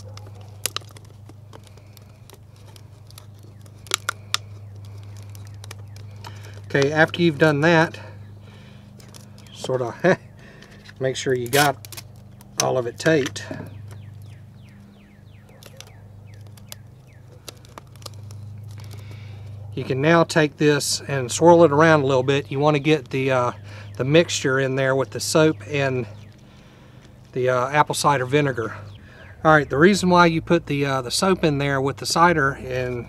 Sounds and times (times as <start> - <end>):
Speech: 6.7 - 8.1, 9.6 - 10.2, 11.0 - 11.8, 12.6 - 13.7, 19.8 - 26.1, 27.4 - 28.8, 29.4 - 33.0.